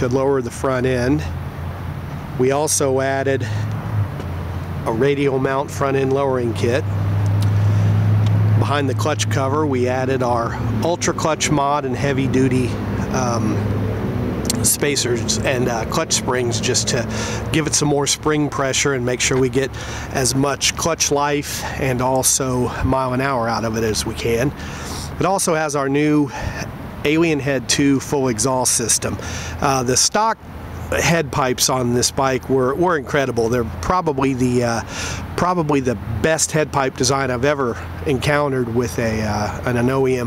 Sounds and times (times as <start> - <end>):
Speech: 0.0 - 1.4, 2.4 - 3.6, 4.8 - 6.9, 8.6 - 13.6, 14.5 - 40.2.